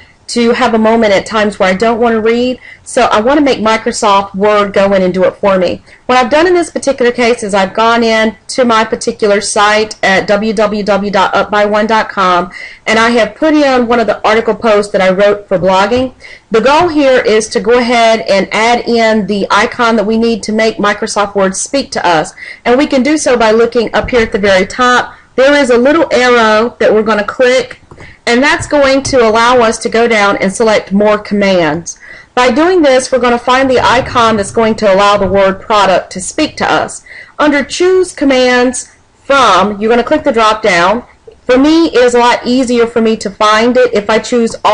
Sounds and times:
Speech: 0:00.3 - 0:44.7.

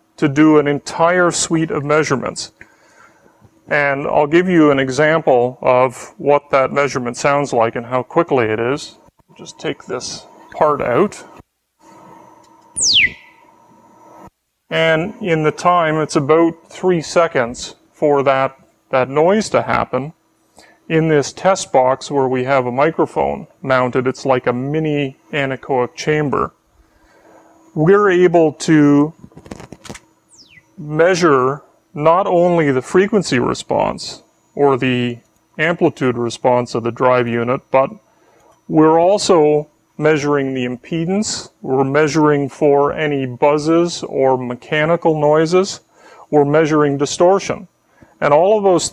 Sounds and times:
Speech: 0:00.2 - 0:02.6, 0:03.7 - 0:11.4, 0:14.7 - 0:20.2, 0:20.9 - 0:26.6, 0:27.8 - 0:29.2, 0:30.8 - 0:38.0, 0:38.7 - 0:48.9.

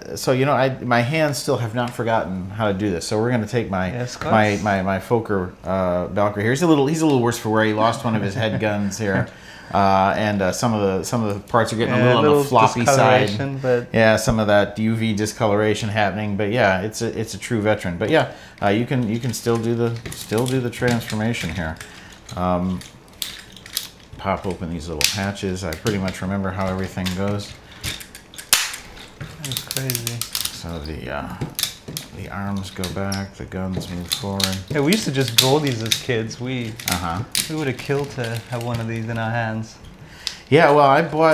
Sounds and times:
Speech: 0:00.0 - 0:22.9, 0:24.2 - 0:27.6, 0:29.4 - 0:31.5, 0:32.2 - 0:39.8, 0:40.5 - 0:41.3
Inside, small room: 0:00.0 - 0:41.3.

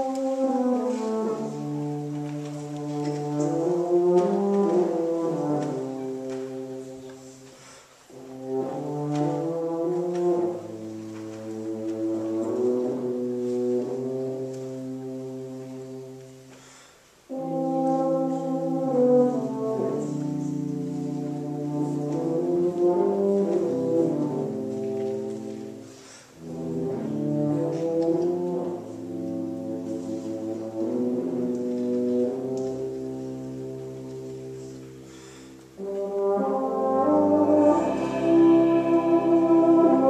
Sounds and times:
Brass instrument: 0:00.0 - 0:40.1
Classical music: 0:00.0 - 0:40.1
Orchestra: 0:00.0 - 0:40.1.

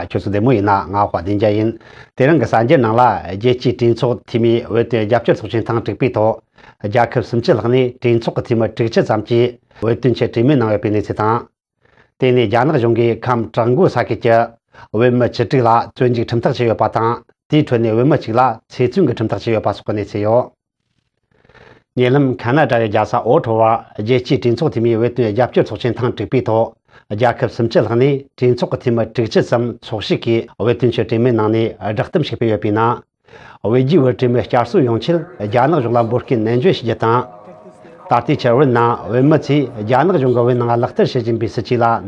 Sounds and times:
Speech: 0:00.0 - 0:11.5, 0:12.2 - 0:20.6, 0:22.0 - 0:42.0.

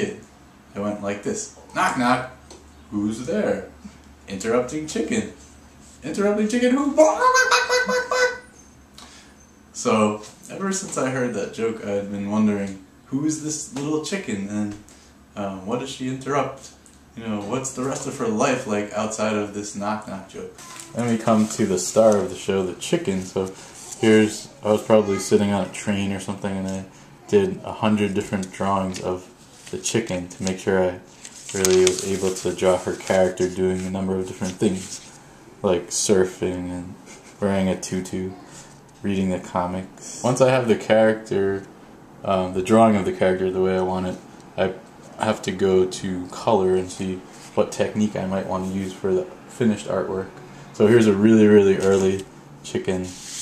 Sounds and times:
Speech: 0:00.0 - 0:05.4, 0:06.0 - 0:08.3, 0:09.8 - 0:35.0, 0:35.6 - 0:53.2.

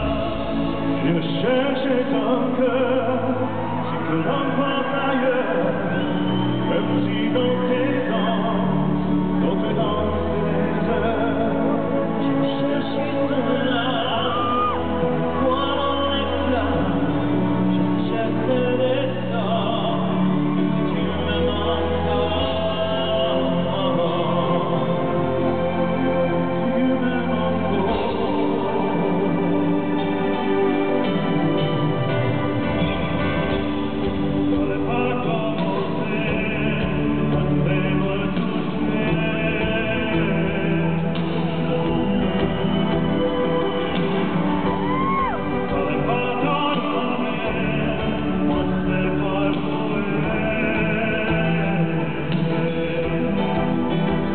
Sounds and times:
Music: 0:00.0 - 0:54.3.

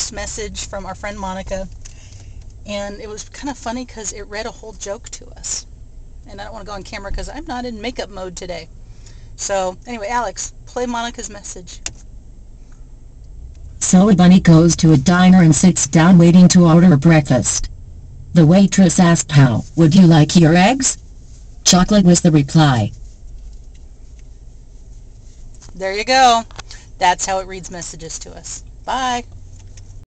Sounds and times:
Speech: 0:00.0 - 0:01.7, 0:02.7 - 0:05.7, 0:06.3 - 0:08.7, 0:09.4 - 0:11.8, 0:13.8 - 0:17.7, 0:18.4 - 0:21.0, 0:21.7 - 0:23.0, 0:25.8 - 0:29.3.

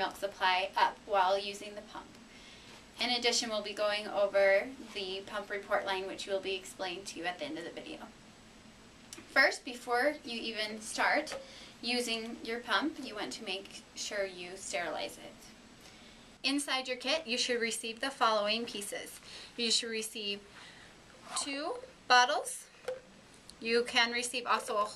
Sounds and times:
Speech: 0:00.0 - 0:02.2, 0:03.0 - 0:08.1, 0:09.2 - 0:15.6, 0:16.5 - 0:20.4, 0:21.3 - 0:22.7, 0:23.6 - 0:24.9.

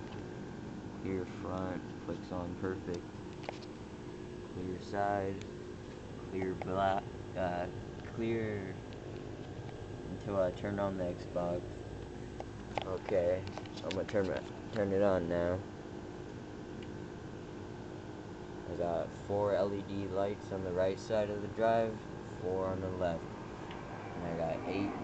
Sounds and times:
Speech: 0:01.0 - 0:03.0, 0:04.6 - 0:05.4, 0:06.3 - 0:08.8, 0:10.1 - 0:11.6, 0:12.8 - 0:15.7, 0:18.7 - 0:23.2, 0:24.2 - 0:25.0.

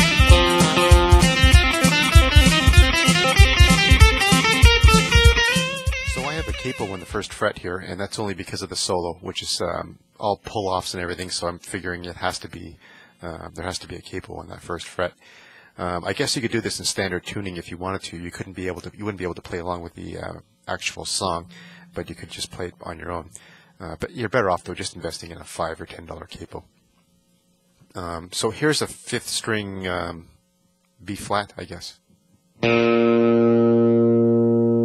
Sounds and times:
Strum: 0:00.0 - 0:07.2
Speech: 0:06.2 - 0:15.2, 0:15.8 - 0:26.7, 0:27.9 - 0:30.4, 0:31.0 - 0:32.0.

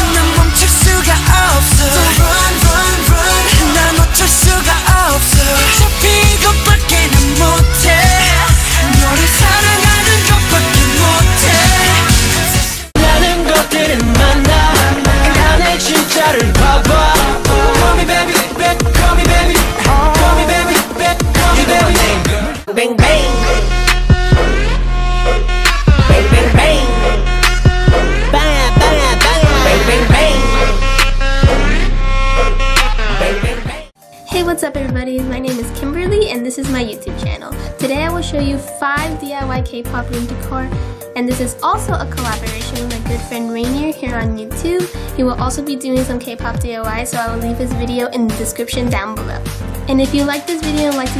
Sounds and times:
Music: 0:00.0 - 0:51.1
Speech: 0:28.4 - 0:30.1, 0:34.3 - 0:51.1.

